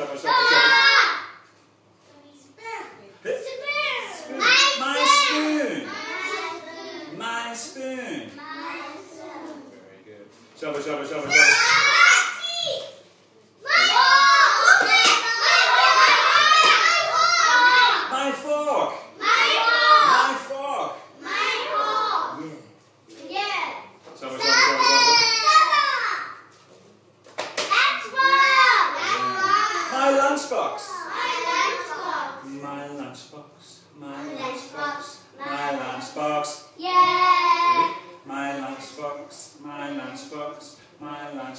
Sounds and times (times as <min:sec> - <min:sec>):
Child speech, kid speaking: 0:00.0 - 0:01.4, 0:02.0 - 0:10.0, 0:11.1 - 0:18.4, 0:19.2 - 0:26.5, 0:27.6 - 0:33.1, 0:34.0 - 0:40.2
Inside, small room: 0:00.0 - 0:41.5.